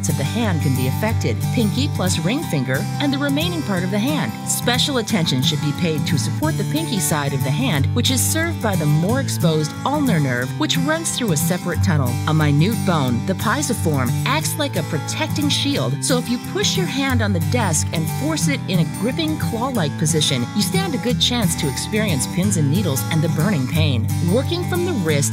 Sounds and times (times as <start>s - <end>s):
Music: 0.0s - 25.3s
Speech: 0.0s - 25.3s.